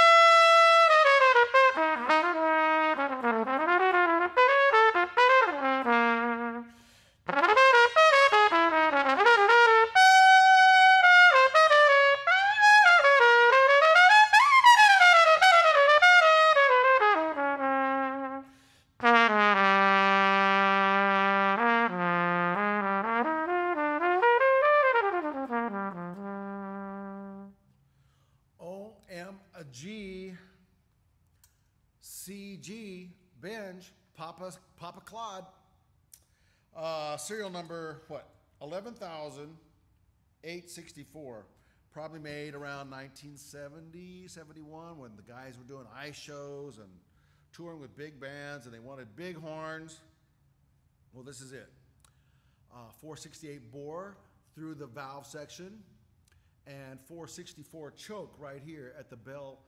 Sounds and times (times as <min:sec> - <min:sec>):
Trumpet: 0:00.0 - 0:27.6.